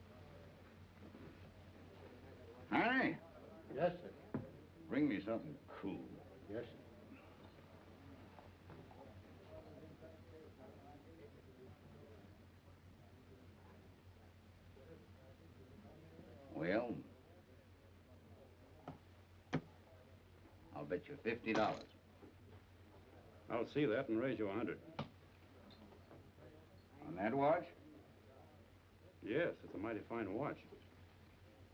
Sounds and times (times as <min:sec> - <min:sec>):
Speech: 0:01.4 - 0:19.1, 0:19.7 - 0:30.9.